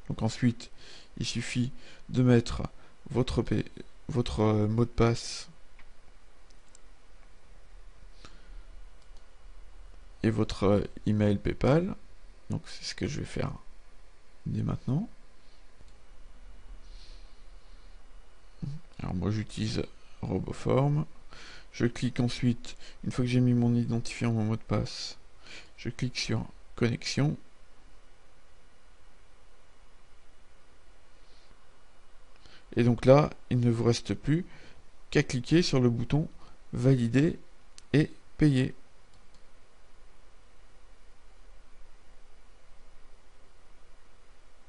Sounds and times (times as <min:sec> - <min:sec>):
Speech: 0:00.0 - 0:05.6, 0:10.2 - 0:13.7, 0:14.4 - 0:15.1, 0:18.6 - 0:21.1, 0:21.7 - 0:25.2, 0:25.8 - 0:27.5, 0:32.7 - 0:34.5, 0:35.1 - 0:38.8.